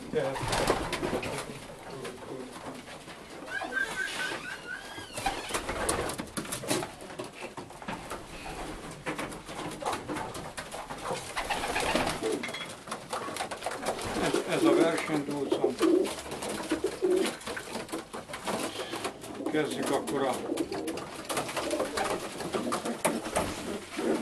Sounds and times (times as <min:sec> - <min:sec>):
Pigeon, dove: 0:00.4 - 0:07.6
Speech: 0:14.2 - 0:15.9, 0:19.4 - 0:20.5.